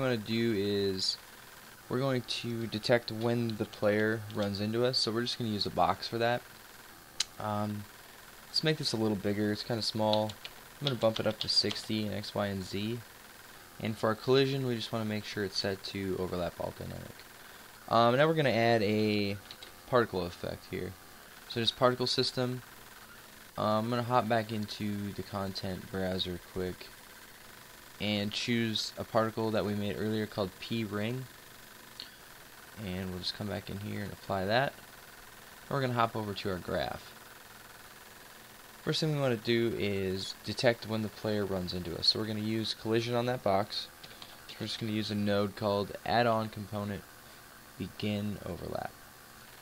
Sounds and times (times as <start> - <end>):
Speech: 0.0 - 1.2, 1.9 - 6.4, 7.2 - 7.9, 8.5 - 13.1, 13.8 - 17.2, 17.9 - 22.6, 23.6 - 26.9, 28.0 - 31.3, 32.8 - 34.8, 35.7 - 37.2, 38.8 - 43.9, 44.5 - 47.0, 47.8 - 49.0.